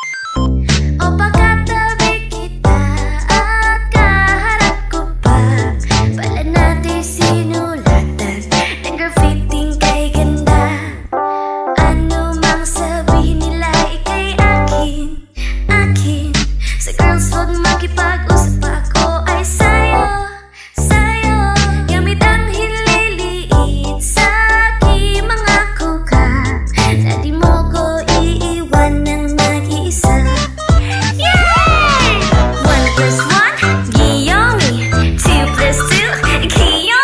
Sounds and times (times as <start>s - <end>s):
Music: 0.0s - 37.0s.